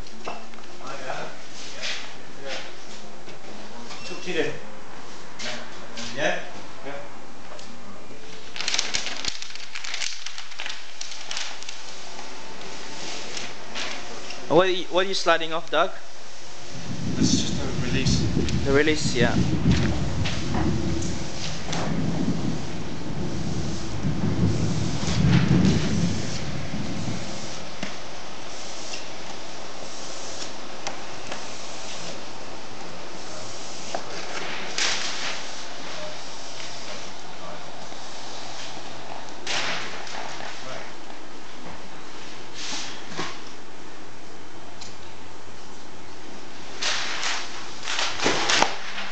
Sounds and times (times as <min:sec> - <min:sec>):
Speech: 0:00.8 - 0:02.7, 0:14.5 - 0:16.0, 0:17.2 - 0:19.4.